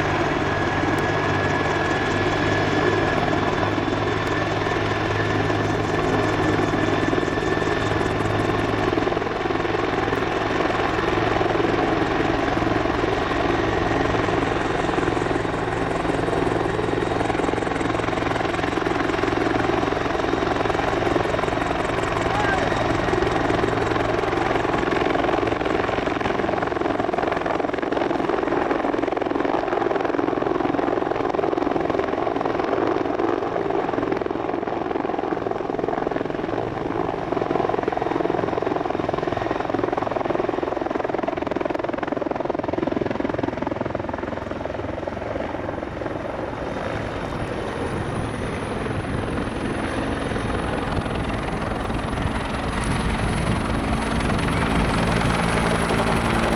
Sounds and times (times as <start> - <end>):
Helicopter: 0.0 - 56.5.